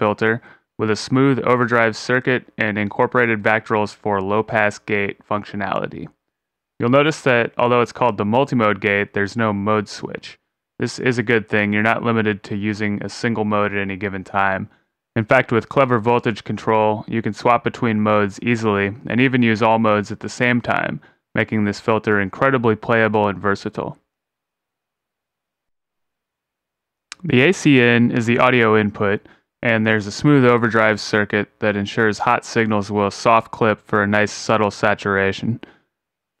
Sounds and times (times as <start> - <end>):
Speech: 0.0 - 6.2, 6.8 - 24.1, 27.1 - 35.8.